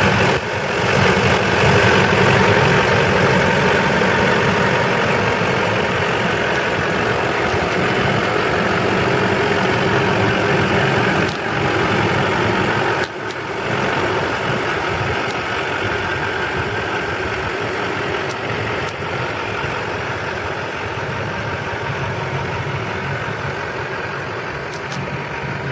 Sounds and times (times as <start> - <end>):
Car: 0.0 - 25.7.